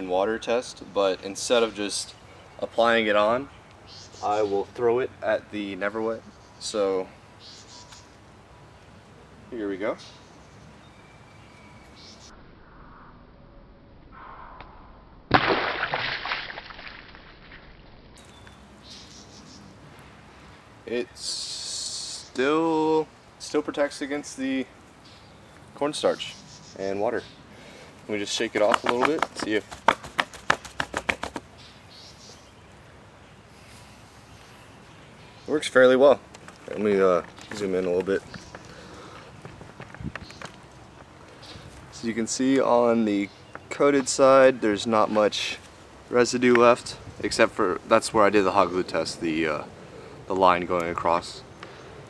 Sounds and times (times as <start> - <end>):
Speech: 0.0 - 3.5, 4.2 - 7.1, 9.5 - 10.1, 20.9 - 24.7, 25.8 - 27.3, 28.1 - 29.7, 35.5 - 38.2, 41.9 - 49.7, 50.3 - 51.4.